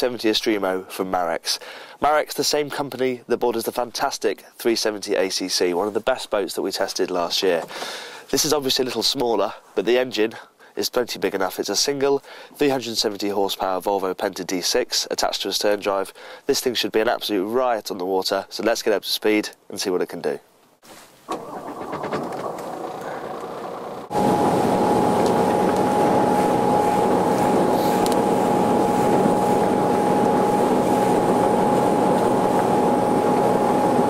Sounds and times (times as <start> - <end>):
Speech: 0.0 - 7.7, 8.3 - 20.5
Motorboat, speedboat: 21.3 - 34.1.